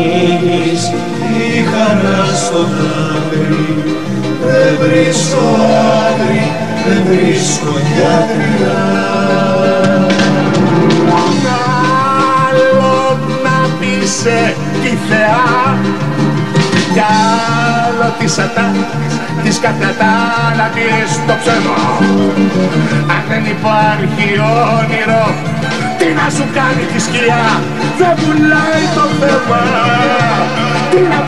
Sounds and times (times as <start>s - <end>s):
Singing: 0.0s - 22.3s, 23.0s - 31.2s
Country: 0.0s - 31.2s.